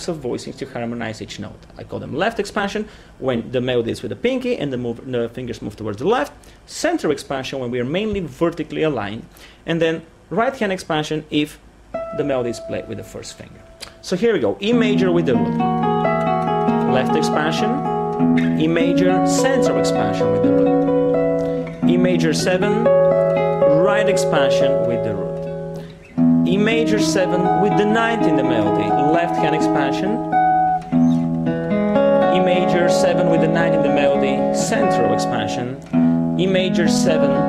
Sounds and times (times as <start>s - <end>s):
Speech: 0.0s - 15.5s, 16.9s - 17.8s, 18.6s - 20.5s, 21.8s - 22.9s, 23.7s - 25.4s, 26.5s - 30.2s, 32.3s - 35.8s, 36.4s - 37.4s
Music: 11.9s - 37.4s
Harmonic: 12.0s - 37.4s.